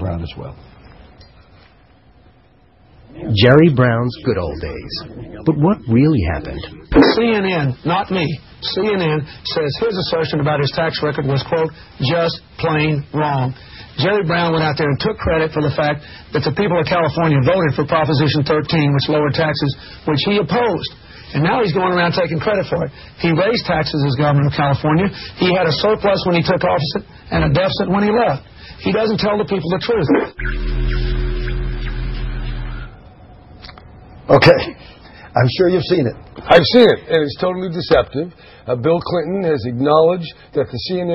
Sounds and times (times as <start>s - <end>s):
Speech: 0.0s - 0.6s, 3.1s - 30.4s, 35.4s - 41.1s.